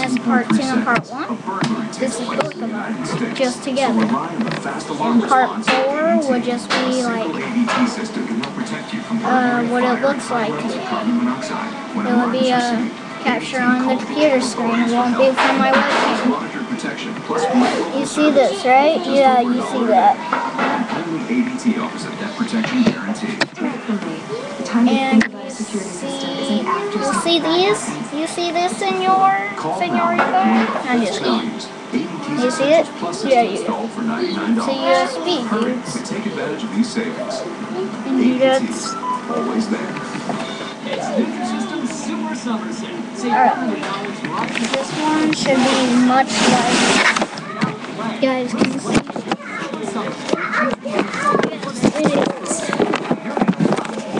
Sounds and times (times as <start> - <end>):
Speech: 0.0 - 54.1.